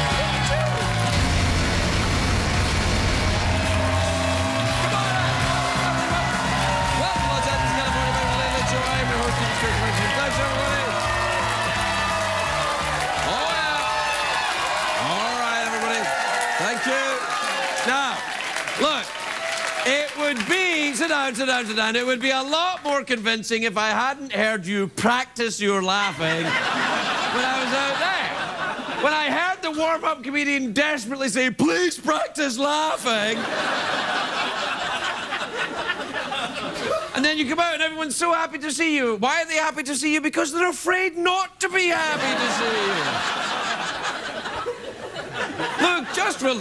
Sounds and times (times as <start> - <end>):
Music: 0.0 - 13.6
Narration, monologue: 15.0 - 33.6, 36.7 - 43.8.